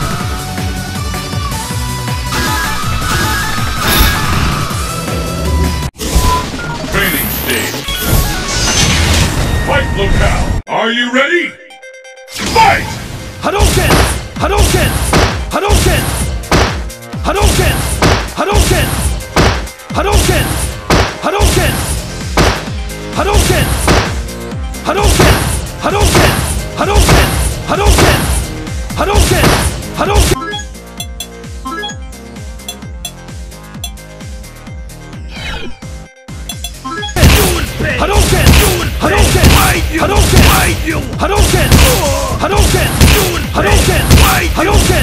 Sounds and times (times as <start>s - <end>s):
Music: 0.0s - 45.0s
Speech: 9.7s - 11.6s, 12.6s - 16.1s, 17.2s - 17.8s, 18.4s - 19.0s, 20.0s - 20.6s, 21.2s - 21.8s, 23.2s - 23.8s, 29.0s - 30.3s, 37.3s - 45.0s.